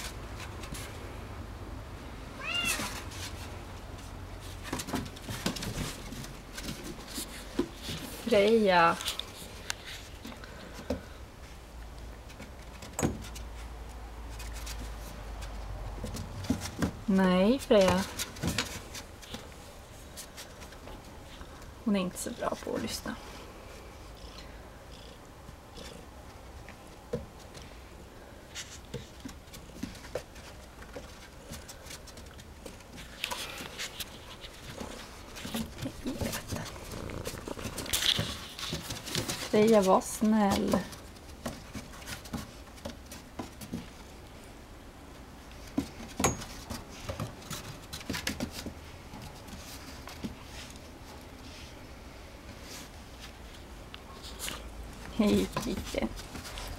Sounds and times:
Speech: 8.2 - 9.1, 17.1 - 18.2, 21.8 - 23.2, 39.5 - 40.9, 55.1 - 56.2.

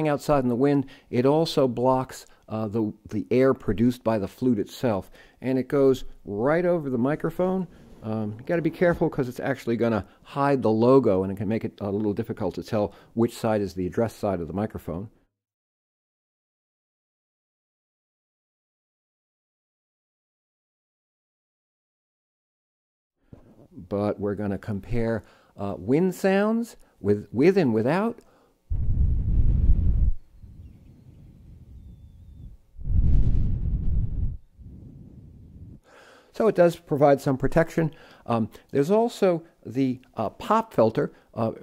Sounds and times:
Speech: 0.0 - 15.2, 23.7 - 28.2, 36.3 - 41.6.

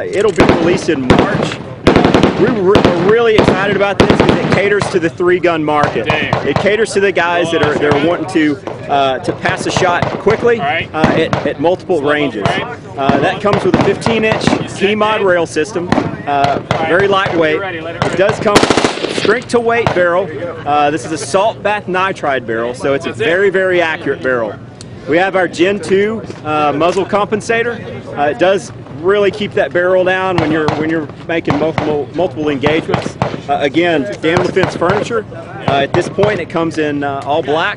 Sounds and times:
Speech: 0.0 - 1.6, 2.4 - 37.7
Machine gun: 0.4 - 4.7, 18.5 - 19.4.

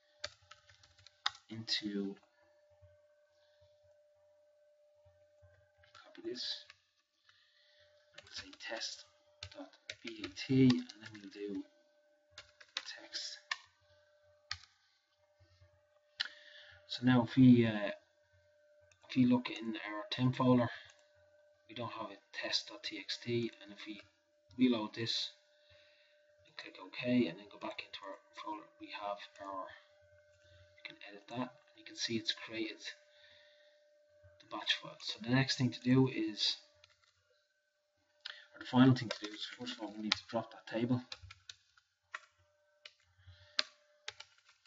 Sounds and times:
Speech: 1.5 - 2.3, 6.0 - 6.7, 8.2 - 11.8, 12.8 - 13.6, 16.9 - 18.1, 19.0 - 21.0, 21.7 - 25.4, 26.5 - 29.9, 30.8 - 33.1, 34.4 - 36.7, 38.5 - 41.2.

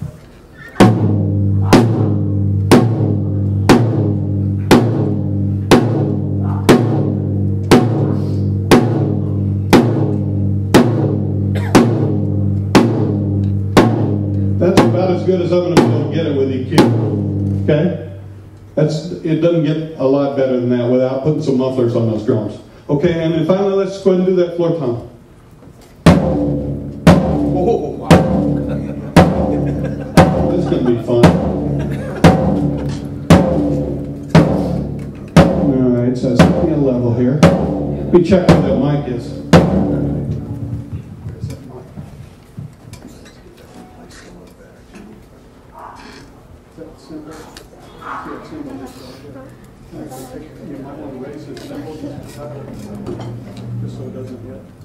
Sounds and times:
Music: 0.8 - 17.7, 26.1 - 42.8
Speech: 14.6 - 16.9, 18.8 - 25.2, 27.5 - 29.0, 30.4 - 31.4, 35.6 - 42.1, 46.7 - 53.2.

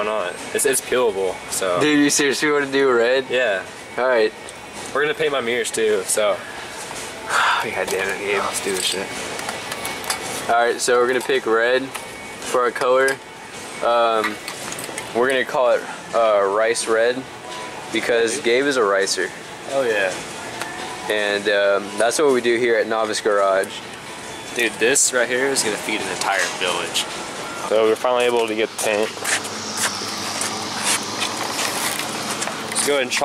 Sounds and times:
Inside, public space: 0.0 - 33.2
Speech: 7.6 - 9.1, 24.6 - 27.0, 27.7 - 29.2, 32.8 - 33.2.

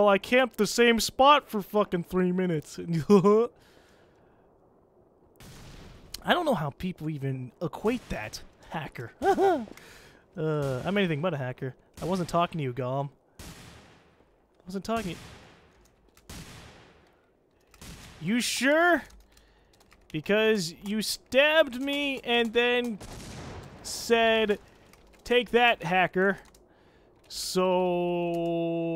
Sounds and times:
Speech: 0.0 - 3.5, 6.2 - 9.7, 10.4 - 13.1, 14.6 - 15.2, 18.2 - 19.1, 20.1 - 23.0, 23.9 - 24.6, 25.2 - 26.5, 27.3 - 28.9.

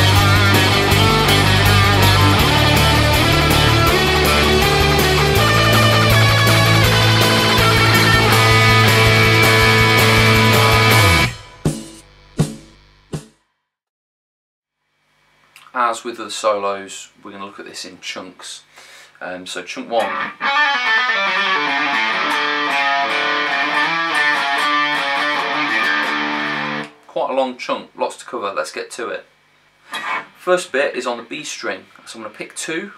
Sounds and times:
Electric guitar: 0.0 - 11.6, 20.0 - 27.1
Heavy metal: 0.0 - 11.8, 20.1 - 26.9
Progressive rock: 0.0 - 11.9, 20.0 - 26.9.

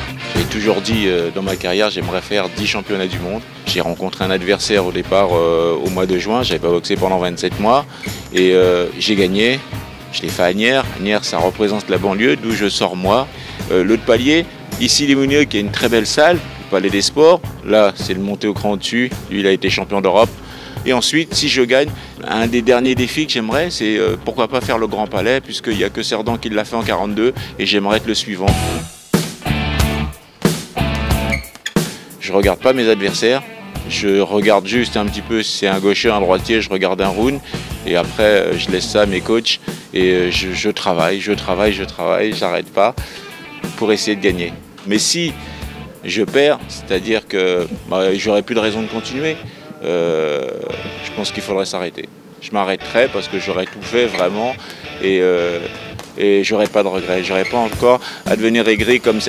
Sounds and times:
Music: 0.0 - 59.2
Speech: 0.4 - 28.6, 32.2 - 43.0, 43.6 - 59.2.

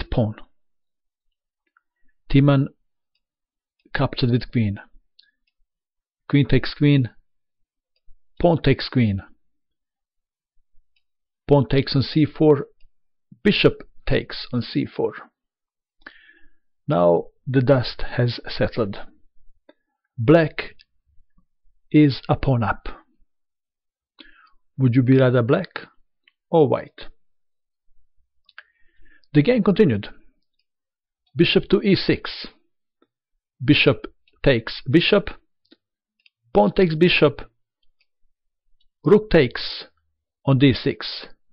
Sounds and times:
Speech: 0.0 - 0.6, 2.3 - 2.8, 3.9 - 5.0, 6.3 - 7.2, 8.4 - 9.4, 11.5 - 12.8, 13.4 - 15.4, 16.9 - 19.2, 20.2 - 20.9, 21.9 - 23.1, 24.8 - 27.2, 29.3 - 30.3, 31.3 - 32.7, 33.6 - 35.5, 36.5 - 37.6, 39.0 - 41.4.

